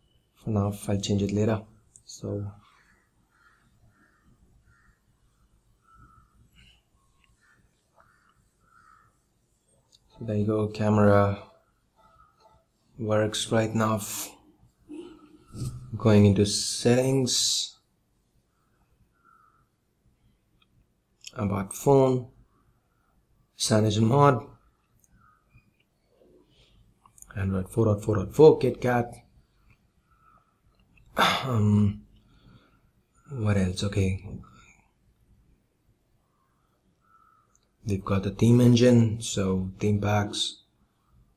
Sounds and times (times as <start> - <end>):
Speech: 0.4 - 2.6, 10.2 - 11.5, 13.0 - 14.4, 15.9 - 17.8, 21.3 - 22.3, 23.6 - 24.6, 27.3 - 29.2, 31.3 - 32.0, 33.3 - 34.5, 37.8 - 40.6.